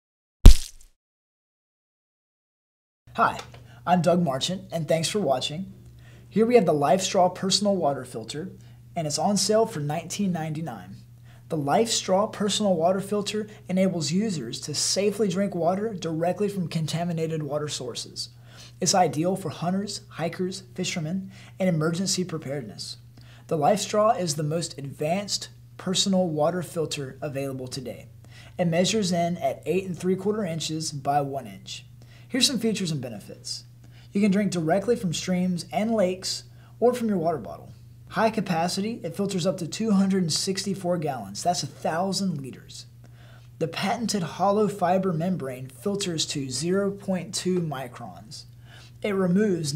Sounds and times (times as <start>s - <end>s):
Speech: 3.1s - 42.9s, 43.6s - 49.7s.